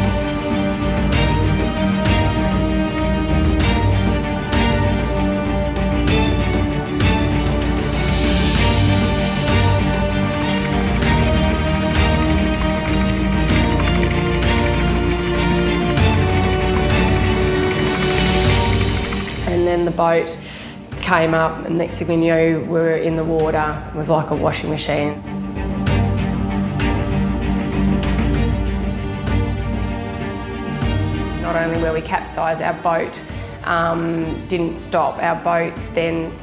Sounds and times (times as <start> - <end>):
Music: 0.0 - 36.4
Helicopter: 9.6 - 20.6.